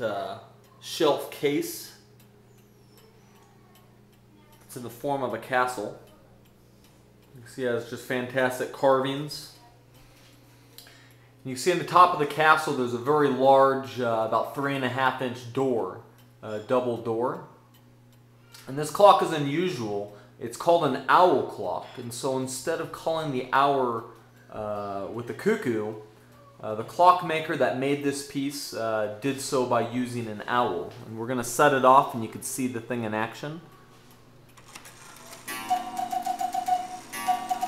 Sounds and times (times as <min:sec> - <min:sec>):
Speech: 0:00.0 - 0:02.0, 0:03.2 - 0:06.2, 0:07.4 - 0:09.8, 0:11.4 - 0:17.5, 0:18.6 - 0:26.0, 0:26.6 - 0:33.8.